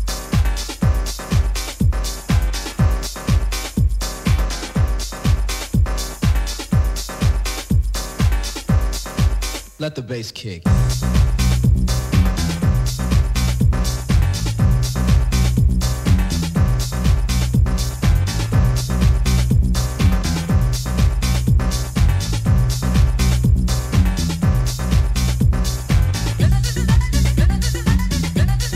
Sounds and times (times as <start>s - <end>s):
Music: 0.0s - 9.8s, 10.7s - 28.7s.